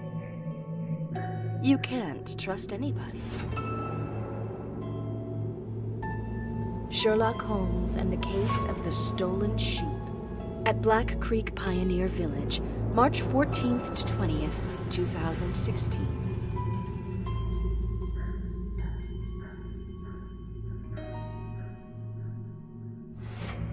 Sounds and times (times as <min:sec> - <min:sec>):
Music: 0:00.0 - 0:23.7
Speech: 0:01.6 - 0:03.2, 0:06.9 - 0:10.0, 0:10.7 - 0:16.2.